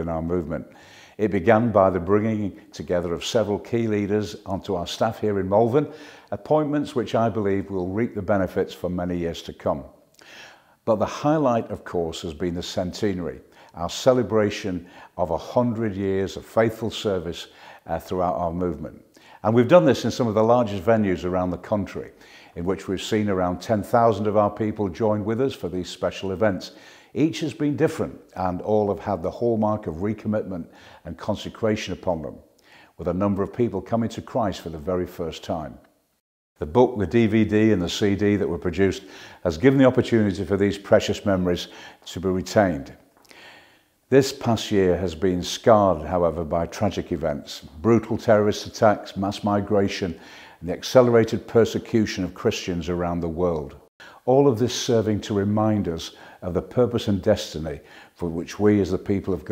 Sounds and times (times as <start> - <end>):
Speech: 0.0 - 10.0, 10.9 - 35.9, 36.6 - 43.0, 44.1 - 59.5.